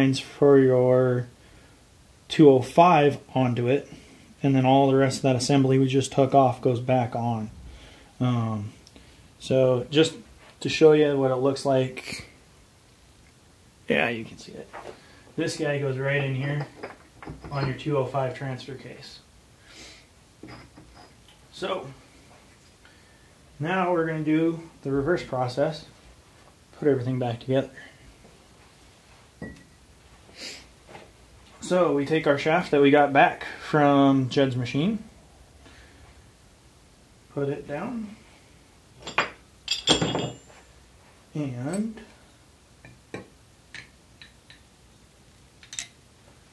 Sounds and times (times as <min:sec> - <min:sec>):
Speech: 0:00.0 - 0:01.3, 0:02.3 - 0:07.5, 0:08.2 - 0:08.8, 0:09.4 - 0:12.4, 0:13.9 - 0:14.8, 0:15.4 - 0:16.8, 0:17.5 - 0:19.3, 0:21.5 - 0:22.0, 0:23.6 - 0:26.0, 0:26.8 - 0:27.8, 0:31.6 - 0:35.1, 0:37.3 - 0:38.2, 0:41.3 - 0:42.2
Inside, small room: 0:00.0 - 0:46.5.